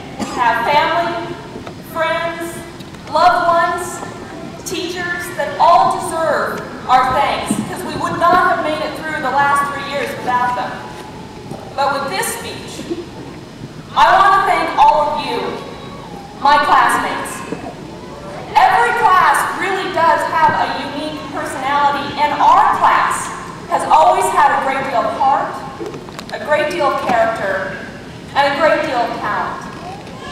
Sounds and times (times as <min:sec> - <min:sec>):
Female speech, woman speaking: 0:00.0 - 0:10.8, 0:11.8 - 0:12.9, 0:13.9 - 0:15.6, 0:16.4 - 0:17.6, 0:18.5 - 0:25.6, 0:26.3 - 0:29.7
Narration, monologue: 0:00.0 - 0:30.0.